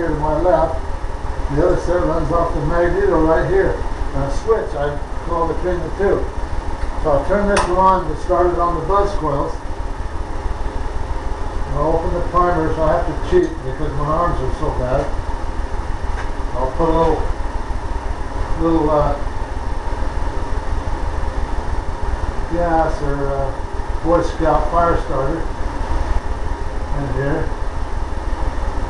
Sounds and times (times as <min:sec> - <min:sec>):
Speech: 0:00.0 - 0:00.8, 0:01.5 - 0:06.3, 0:07.0 - 0:09.6, 0:11.7 - 0:15.2, 0:16.6 - 0:17.3, 0:18.6 - 0:19.3, 0:22.5 - 0:25.5, 0:26.9 - 0:27.5
Engine: 0:00.0 - 0:28.8.